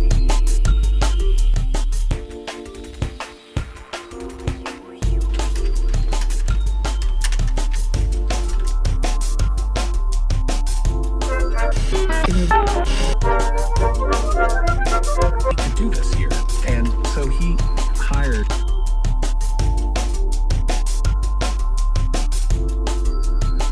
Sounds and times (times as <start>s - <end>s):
Music: 0.0s - 23.7s
Radio: 11.3s - 13.2s
Speech: 15.6s - 18.6s.